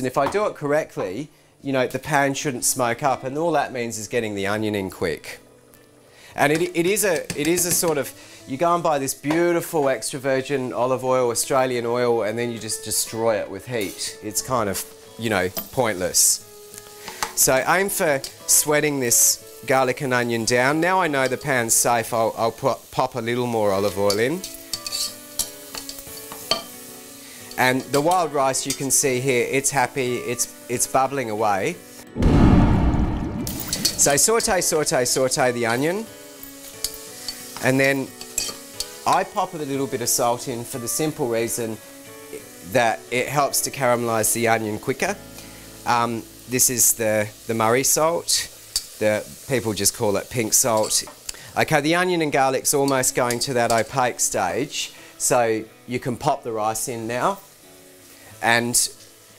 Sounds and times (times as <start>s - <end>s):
Sizzle: 3.7s - 32.2s, 33.0s - 59.3s
Stir: 24.1s - 26.7s.